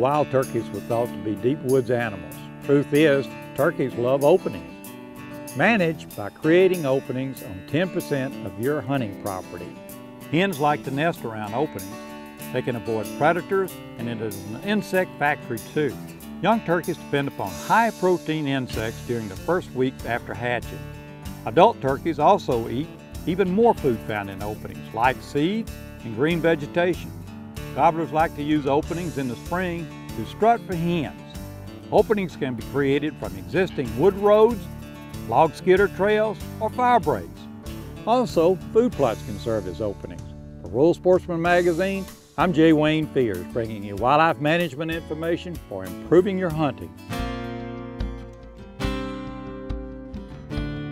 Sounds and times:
Speech: 0.0s - 4.7s, 5.6s - 11.9s, 12.5s - 20.8s, 21.5s - 27.1s, 27.8s - 31.3s, 31.9s - 34.7s, 35.3s - 37.4s, 38.1s - 46.9s
Music: 0.0s - 50.9s.

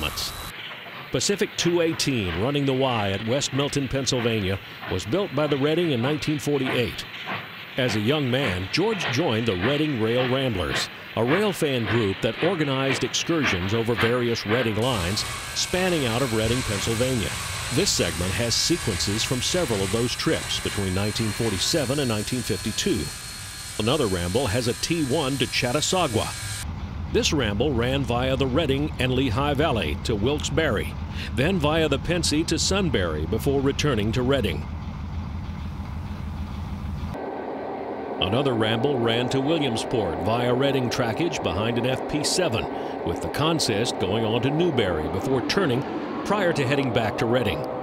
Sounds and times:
Speech: 0.0s - 0.4s, 1.1s - 7.1s, 7.8s - 23.1s, 23.8s - 26.4s, 27.2s - 34.6s, 38.2s - 47.7s.

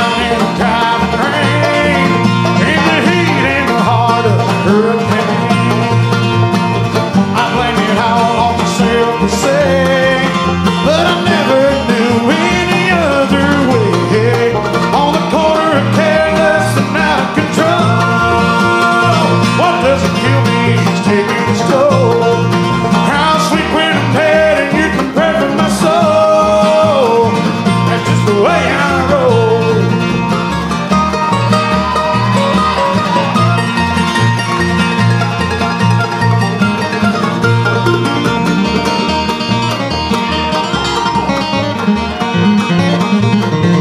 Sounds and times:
Country: 0.0s - 43.8s.

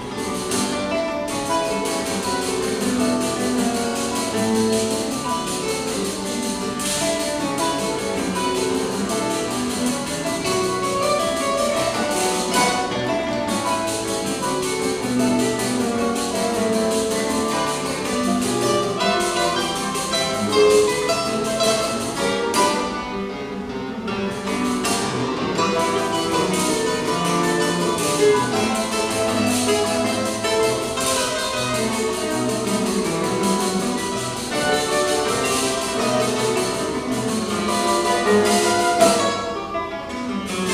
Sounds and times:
Acoustic guitar: 0.0s - 40.7s
Strum: 0.0s - 40.7s.

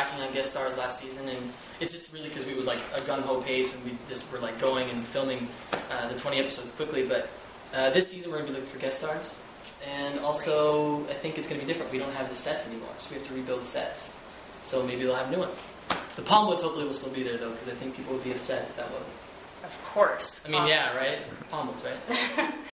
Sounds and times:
Speech: 0.0s - 22.1s.

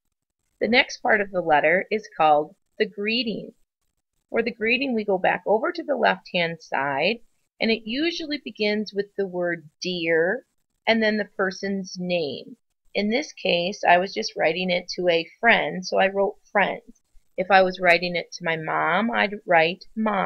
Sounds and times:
Speech: 0.6s - 3.5s, 4.4s - 20.2s.

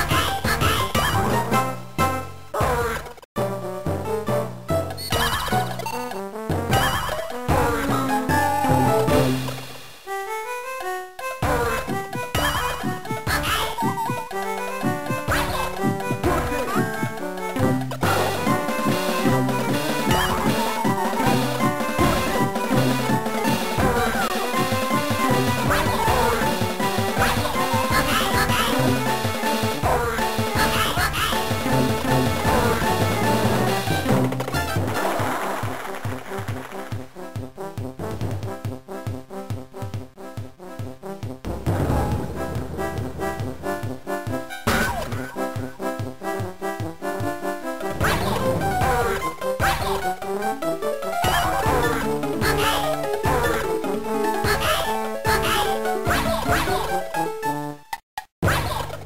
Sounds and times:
Music: 0.0s - 58.0s.

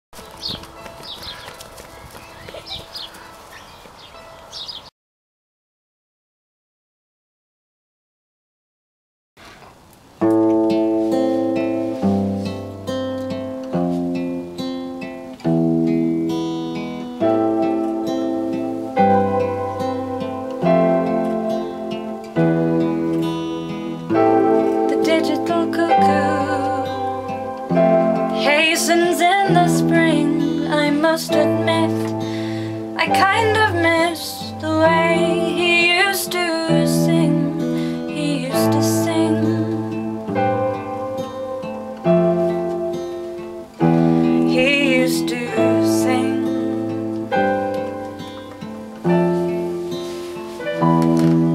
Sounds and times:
Livestock, farm animals, working animals: 0.2s - 4.9s.

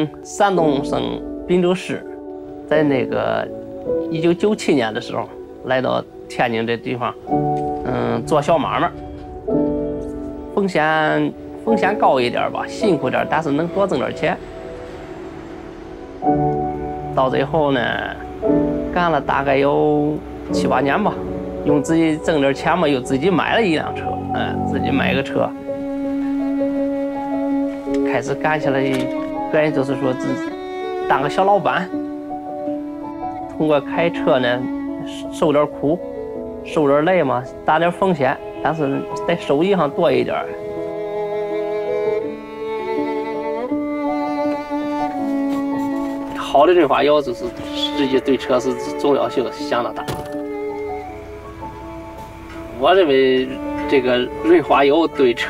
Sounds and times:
Speech: 0.0s - 3.5s, 4.1s - 7.2s, 7.8s - 9.0s, 10.6s - 14.4s, 17.2s - 18.2s, 18.9s - 25.6s, 28.0s - 30.5s, 31.1s - 31.9s, 33.6s - 36.0s, 36.7s - 40.6s, 46.3s - 50.2s, 52.8s - 55.4s
Music: 0.0s - 55.4s.

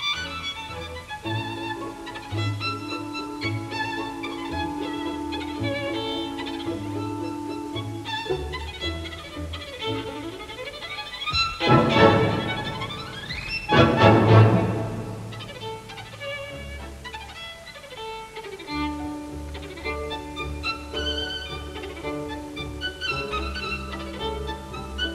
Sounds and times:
Violin, fiddle: 0.0s - 25.1s.

